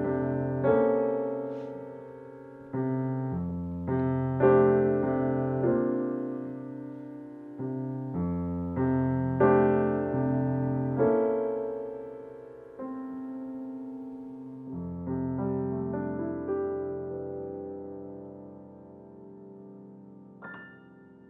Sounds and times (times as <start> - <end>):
Piano: 0.0 - 21.2.